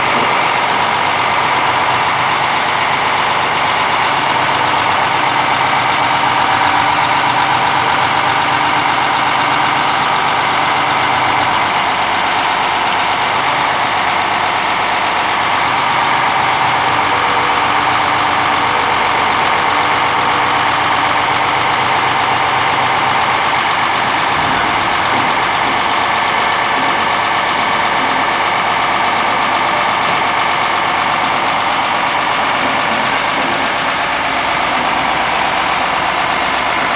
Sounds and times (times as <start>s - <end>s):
Truck: 0.0s - 36.9s.